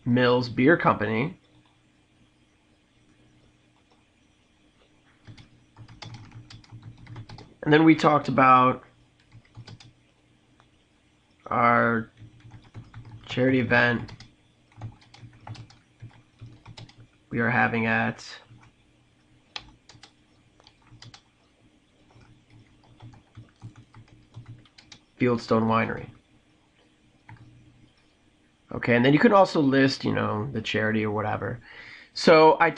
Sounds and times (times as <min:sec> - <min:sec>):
Computer keyboard: 0:05.2 - 0:07.5, 0:09.2 - 0:09.9, 0:12.1 - 0:17.1, 0:19.5 - 0:21.4, 0:22.0 - 0:25.1, 0:27.2 - 0:28.1.